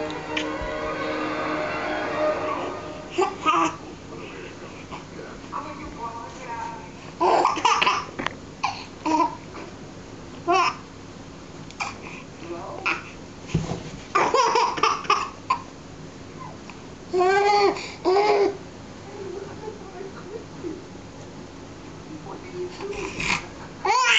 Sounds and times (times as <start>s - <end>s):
Speech: 4.2s - 7.0s, 12.4s - 13.0s, 19.0s - 20.9s, 22.1s - 24.0s.